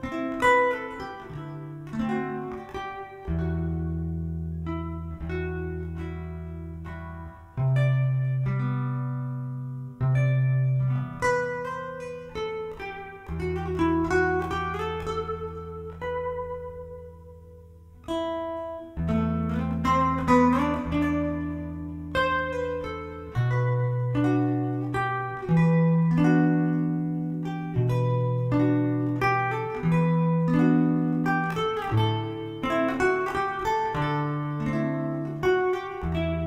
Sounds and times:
Music: 0.0 - 36.4.

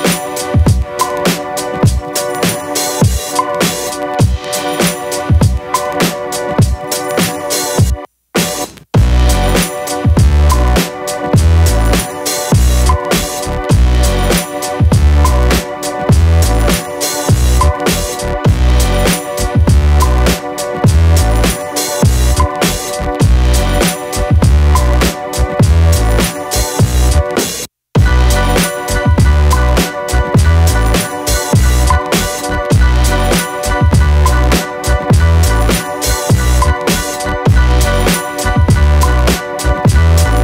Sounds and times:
Music: 0.0 - 40.4.

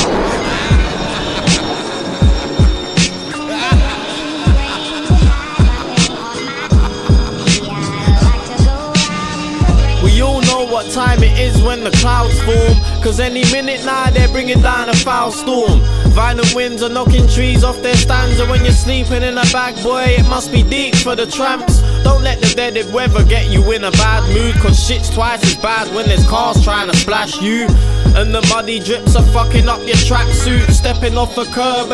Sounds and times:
Music: 0.0 - 31.9.

